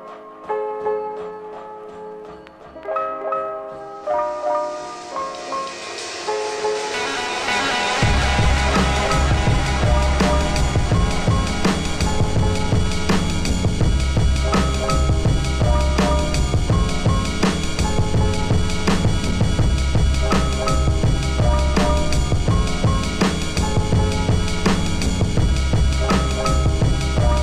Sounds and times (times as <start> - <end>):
Music: 0.0 - 27.4.